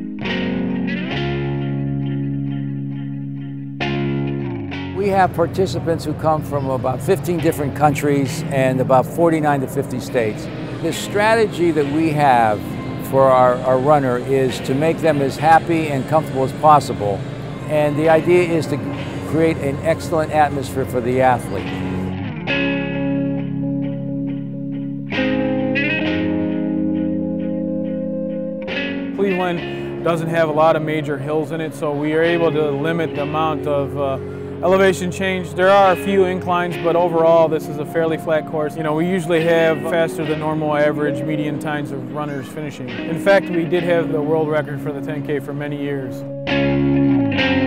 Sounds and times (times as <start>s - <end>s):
Music: 0.0s - 47.6s
Speech: 5.0s - 21.7s, 29.2s - 46.2s.